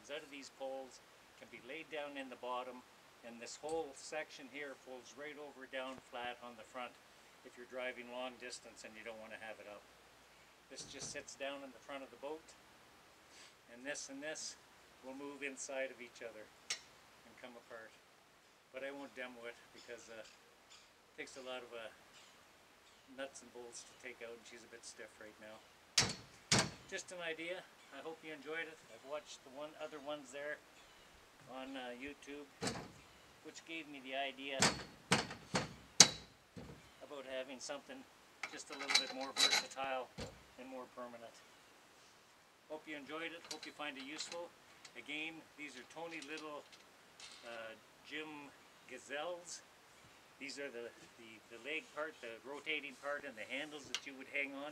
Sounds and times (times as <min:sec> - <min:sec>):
Speech: 0:00.0 - 0:09.9, 0:10.7 - 0:12.6, 0:13.7 - 0:16.5, 0:17.2 - 0:18.0, 0:18.7 - 0:20.4, 0:21.2 - 0:22.0, 0:23.1 - 0:25.7, 0:26.9 - 0:30.6, 0:31.4 - 0:32.6, 0:33.4 - 0:34.8, 0:37.0 - 0:41.4, 0:42.7 - 0:46.7, 0:47.4 - 0:49.6, 0:50.4 - 0:54.7.